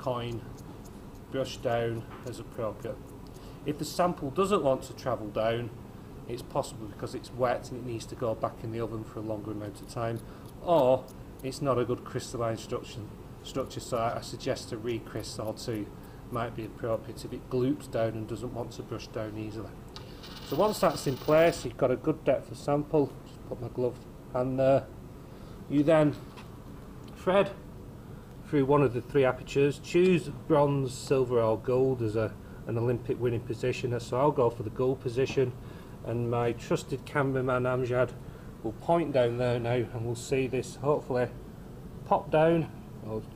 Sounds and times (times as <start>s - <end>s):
Speech: 0.0s - 0.5s, 1.3s - 3.0s, 3.6s - 19.8s, 20.5s - 24.9s, 25.7s - 26.2s, 27.1s - 27.7s, 28.5s - 41.4s, 42.0s - 43.3s.